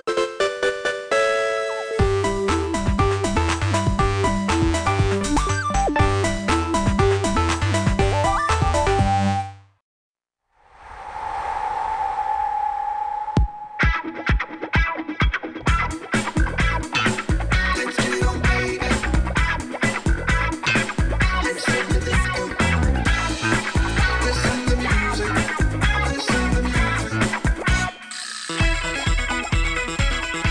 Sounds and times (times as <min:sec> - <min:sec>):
Music: 0:00.0 - 0:09.8, 0:13.8 - 0:30.5.